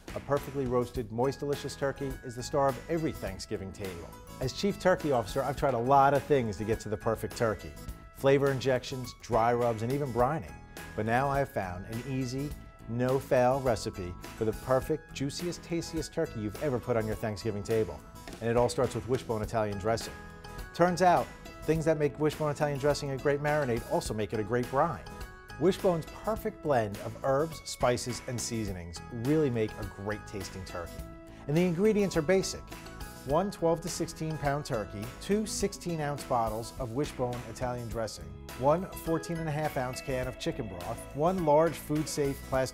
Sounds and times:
Music: 0.0s - 42.7s
Speech: 0.1s - 20.2s, 20.8s - 30.9s, 31.5s - 32.7s, 33.3s - 42.7s.

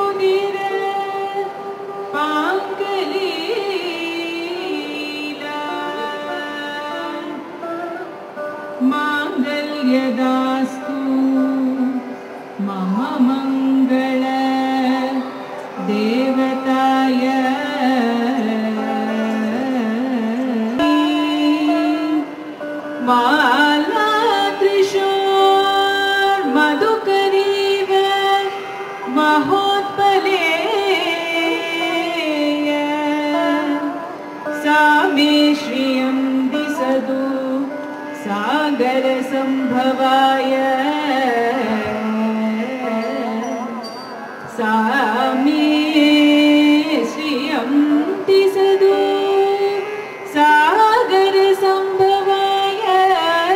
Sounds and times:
Carnatic music: 0.0s - 53.5s.

